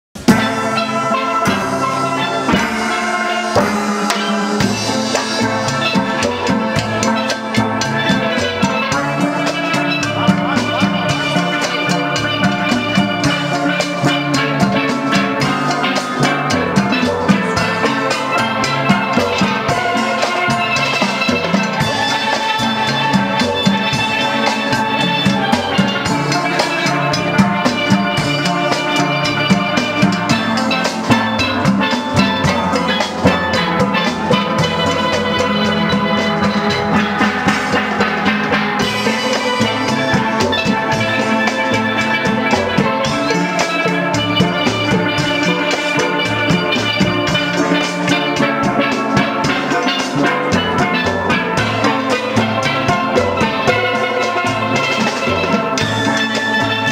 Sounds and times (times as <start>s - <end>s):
Steelpan: 0.2s - 56.9s.